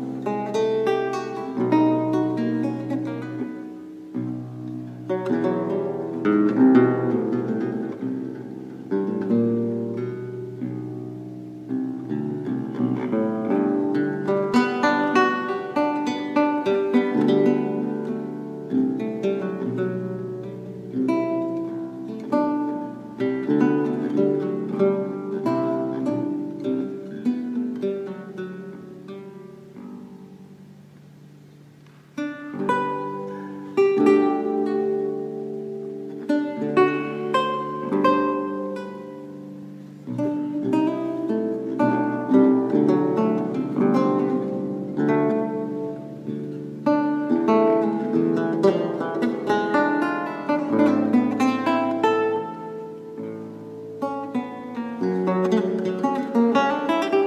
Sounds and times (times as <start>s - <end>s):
Plucked string instrument: 0.0s - 57.2s.